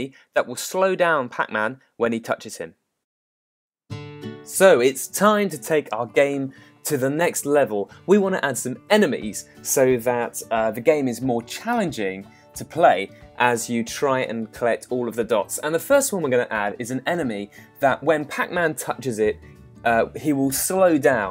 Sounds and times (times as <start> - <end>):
Speech: 0.0 - 2.8, 4.5 - 21.3
Music: 3.9 - 21.3.